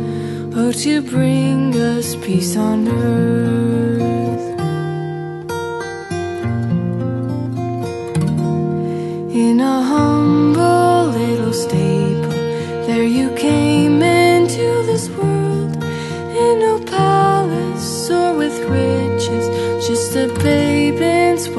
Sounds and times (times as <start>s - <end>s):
Lullaby: 0.0s - 5.6s, 9.0s - 21.5s.